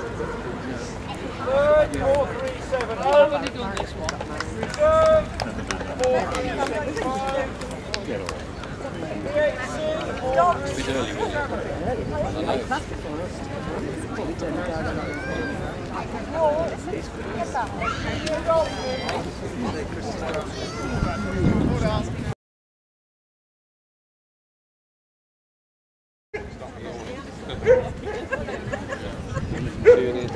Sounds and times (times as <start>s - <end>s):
Speech: 0.0s - 22.4s.